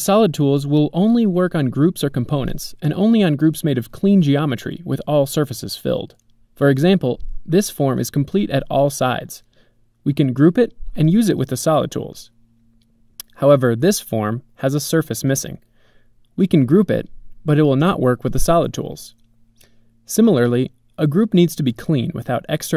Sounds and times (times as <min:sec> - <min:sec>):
Speech: 0:00.0 - 0:12.4, 0:13.2 - 0:15.6, 0:16.4 - 0:19.2, 0:20.1 - 0:22.7.